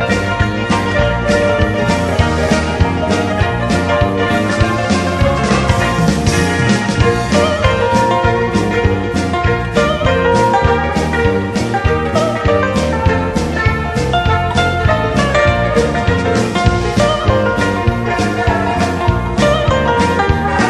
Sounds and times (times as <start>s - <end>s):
Music: 0.0s - 20.6s.